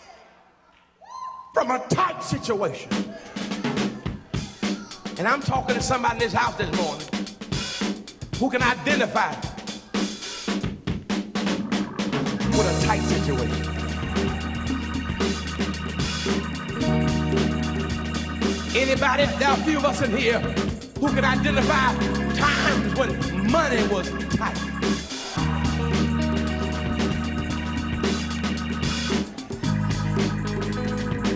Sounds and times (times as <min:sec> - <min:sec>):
Drum: 0:02.9 - 0:31.3.